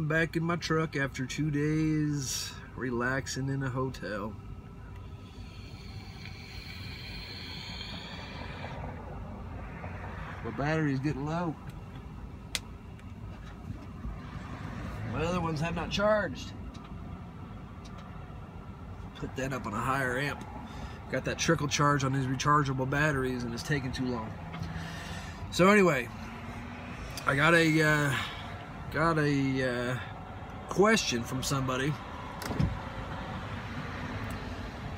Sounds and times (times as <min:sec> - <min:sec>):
Vehicle: 0:00.0 - 0:34.9.